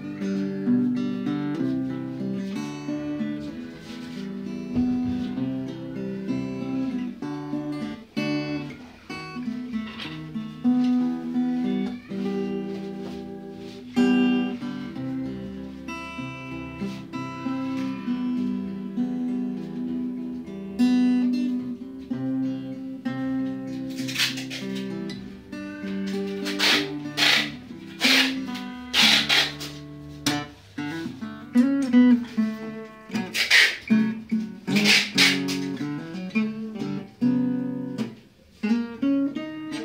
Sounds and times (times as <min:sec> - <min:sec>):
Acoustic guitar: 0:00.0 - 0:39.8
Strum: 0:00.0 - 0:39.8.